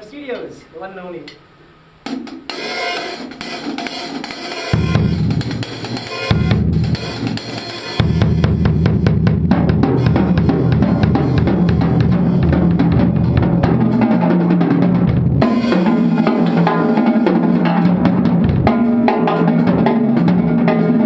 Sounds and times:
Speech: 0:00.0 - 0:01.4
Drum kit: 0:02.0 - 0:21.0
Rhythm and blues: 0:02.1 - 0:21.0
Bass drum: 0:04.8 - 0:21.0.

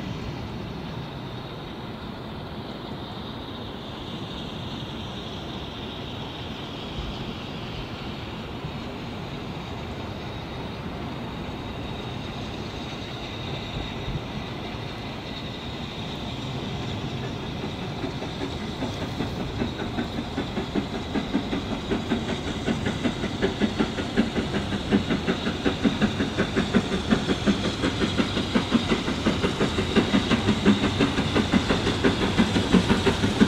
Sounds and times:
Railroad car, train wagon: 0:00.0 - 0:33.4
Train: 0:00.0 - 0:33.4.

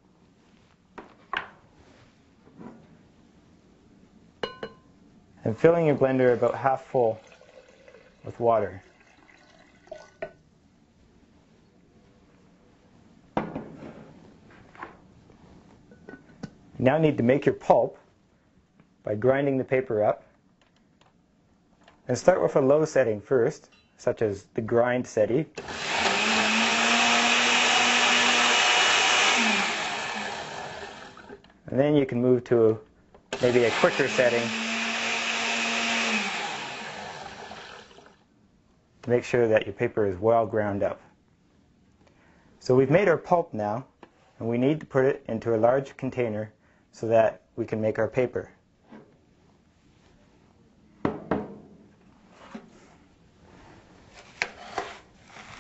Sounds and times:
Speech: 0:05.4 - 0:07.3, 0:08.2 - 0:08.9, 0:16.8 - 0:18.0, 0:19.0 - 0:20.2, 0:22.1 - 0:25.5, 0:31.7 - 0:32.8, 0:33.4 - 0:34.6, 0:39.1 - 0:41.1, 0:42.6 - 0:48.6.

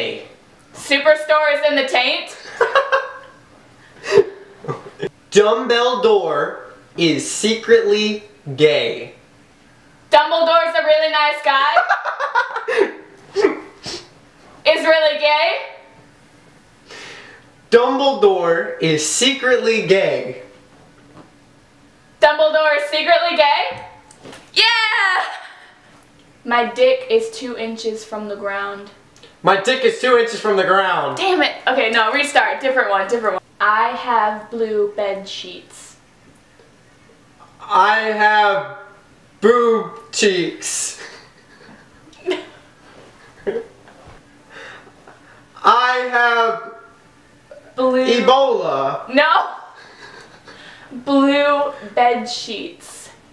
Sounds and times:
Inside, small room: 0:00.0 - 0:53.3.

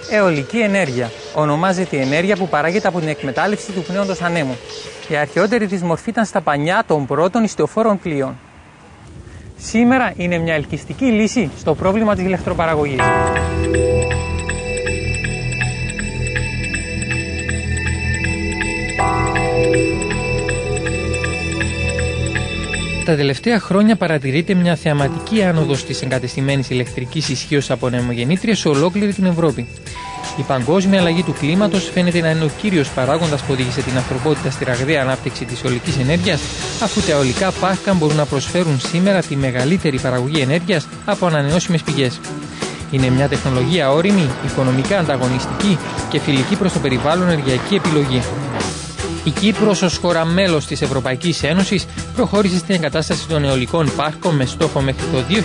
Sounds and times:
Music: 0:00.0 - 0:06.2, 0:12.9 - 0:55.4
Speech: 0:00.0 - 0:08.4, 0:09.6 - 0:13.1, 0:23.1 - 0:29.7, 0:30.4 - 0:42.3, 0:42.9 - 0:48.4, 0:49.3 - 0:55.4.

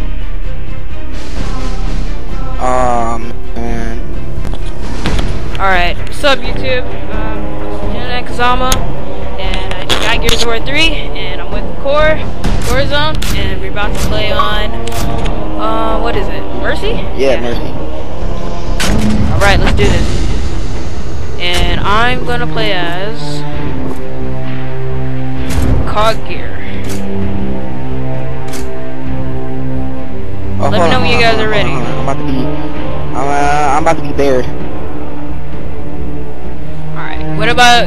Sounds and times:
Music: 0:00.0 - 0:37.8
Speech: 0:02.6 - 0:04.0, 0:09.4 - 0:14.7, 0:15.6 - 0:17.7, 0:19.3 - 0:20.1, 0:21.4 - 0:23.4, 0:30.6 - 0:32.5, 0:33.2 - 0:34.5.

